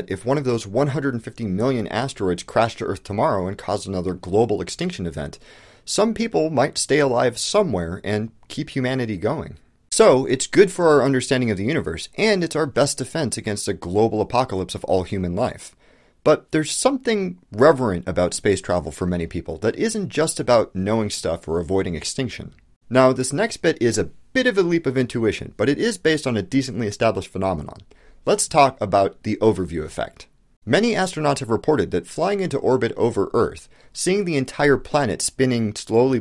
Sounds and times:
Narration, monologue: 0.0 - 36.2.

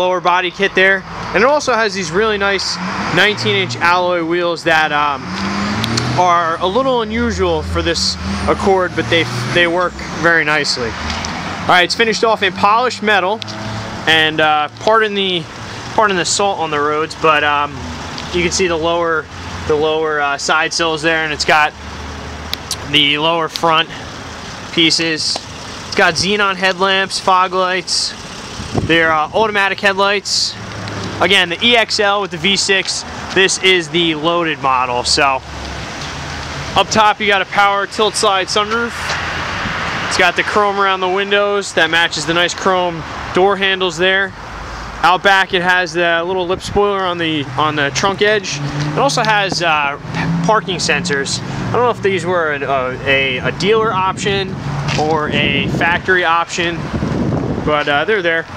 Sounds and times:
Speech: 0.0 - 5.3, 6.1 - 11.0, 11.7 - 13.4, 14.1 - 21.8, 22.7 - 24.0, 24.7 - 28.2, 28.9 - 30.6, 31.2 - 35.4, 36.8 - 39.2, 40.1 - 44.4, 45.0 - 56.9, 57.7 - 58.5
Car passing by: 5.2 - 6.5, 48.4 - 52.0.

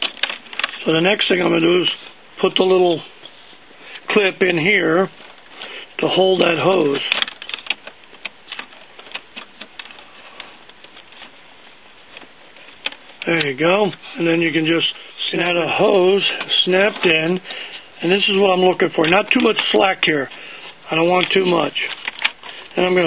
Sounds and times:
Speech: 0.8 - 3.1, 4.1 - 5.2, 6.0 - 7.2, 13.2 - 17.4, 18.0 - 22.0, 22.8 - 23.0.

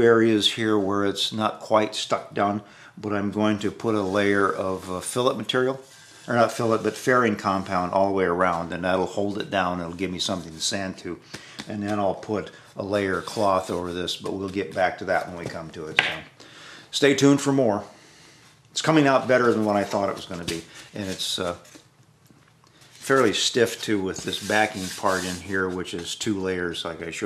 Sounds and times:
Speech: 0.0 - 16.3, 16.9 - 18.0, 18.8 - 21.7, 23.0 - 27.2.

